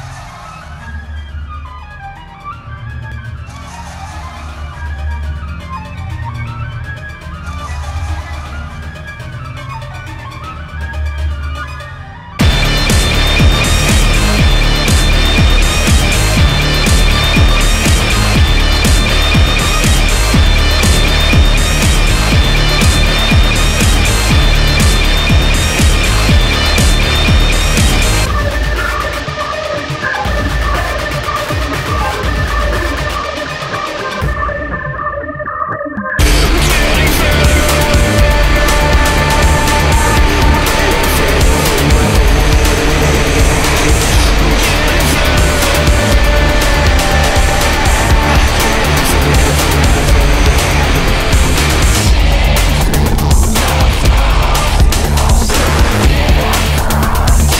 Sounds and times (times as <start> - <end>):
Soundtrack music: 0.0 - 57.5.